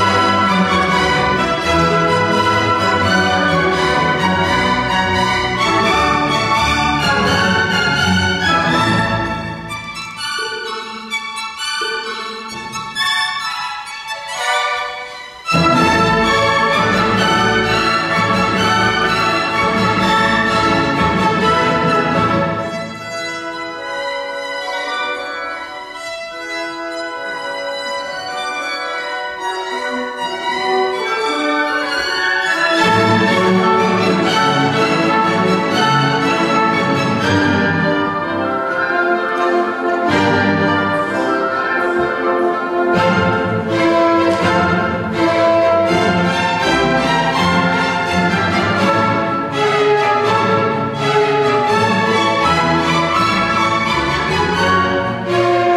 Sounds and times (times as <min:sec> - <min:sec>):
Violin, fiddle: 0:00.0 - 0:55.7.